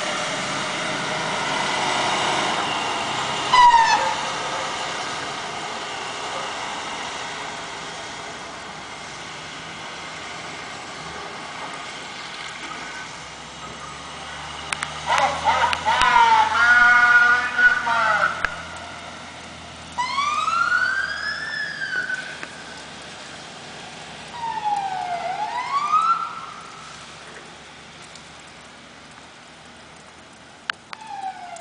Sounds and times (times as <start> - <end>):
Fire engine, fire truck (siren): 0.0 - 30.1, 30.7 - 31.6.